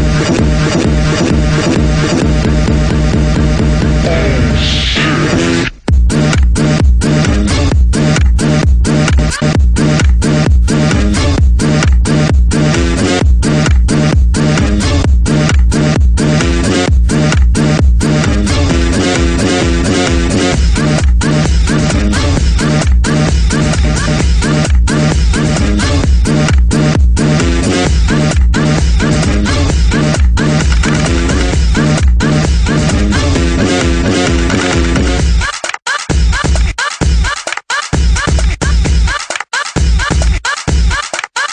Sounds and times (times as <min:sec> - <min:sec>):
Music: 0:00.0 - 0:41.5.